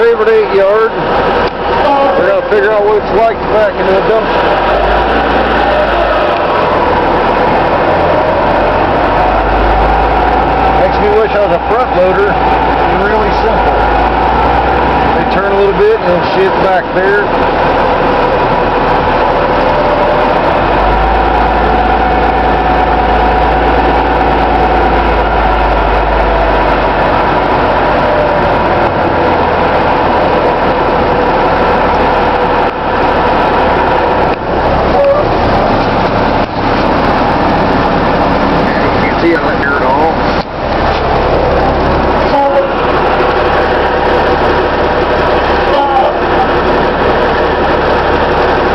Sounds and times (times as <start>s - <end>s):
Truck: 0.0s - 48.7s.